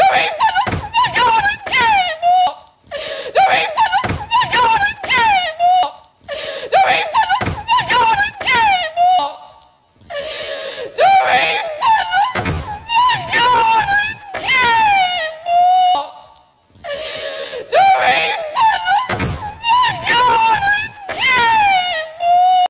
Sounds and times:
Door: 12.3 - 12.8, 19.0 - 19.6.

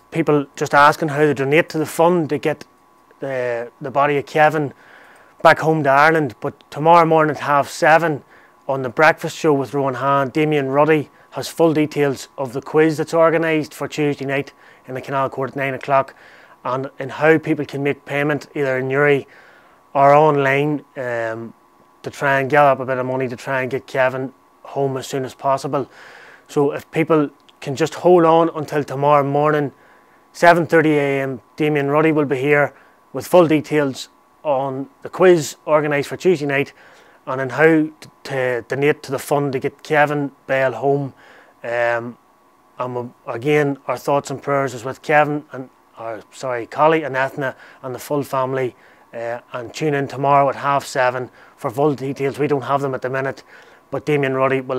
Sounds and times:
Speech: 0.0 - 4.8, 5.4 - 19.3, 20.0 - 25.9, 26.5 - 29.8, 30.4 - 42.2, 42.8 - 54.7.

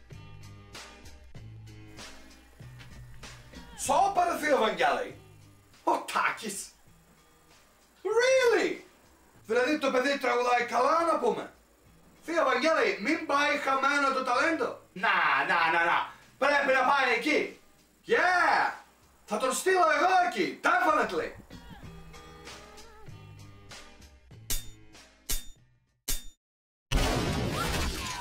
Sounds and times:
Music: 0.0 - 26.0
Speech: 3.7 - 5.2, 5.8 - 6.8, 8.0 - 8.9, 9.5 - 11.6, 12.2 - 21.4.

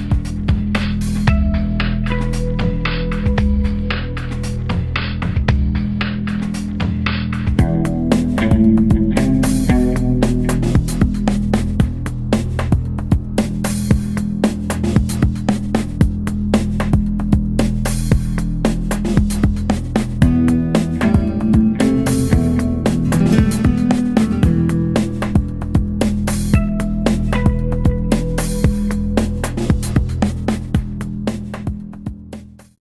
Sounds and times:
Music: 0.0 - 32.8.

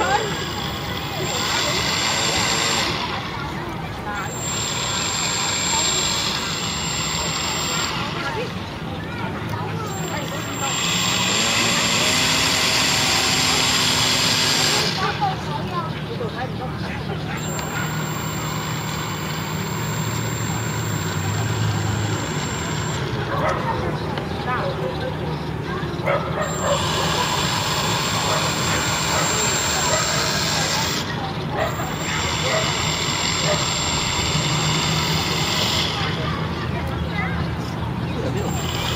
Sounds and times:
Speech: 0.0 - 4.4, 7.2 - 13.7, 14.6 - 18.0, 23.1 - 34.2, 35.2 - 38.9.

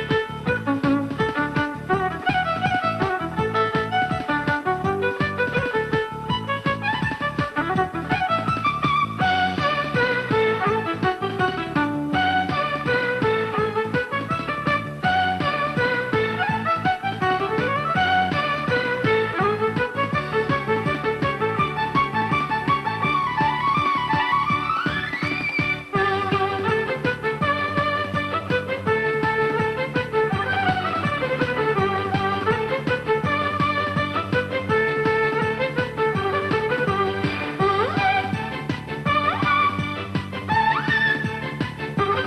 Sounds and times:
Violin, fiddle: 0.0 - 42.2.

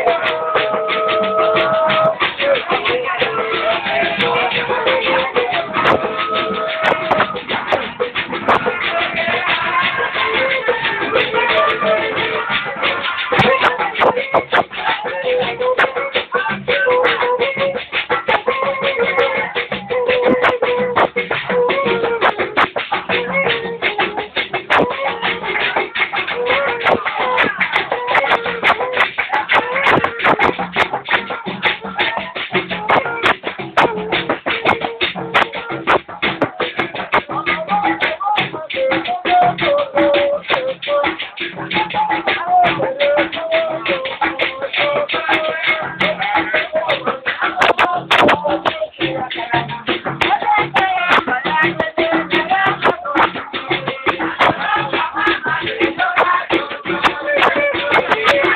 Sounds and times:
Music: 0.0 - 58.5.

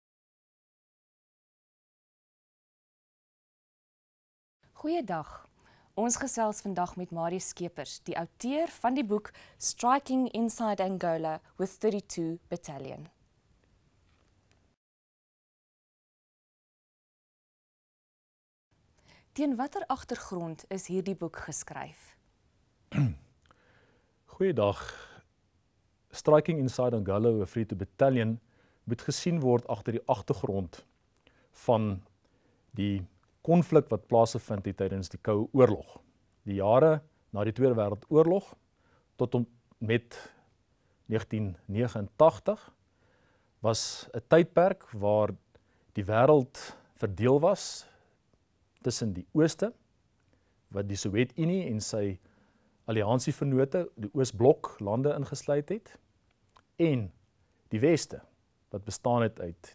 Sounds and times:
Speech: 4.8 - 13.2, 19.4 - 22.2, 24.3 - 25.2, 26.2 - 30.9, 31.6 - 32.1, 32.8 - 38.6, 39.2 - 40.3, 41.1 - 42.7, 43.6 - 45.4, 46.0 - 47.9, 48.8 - 49.8, 50.8 - 52.2, 52.9 - 56.0, 56.8 - 57.2, 57.8 - 59.7.

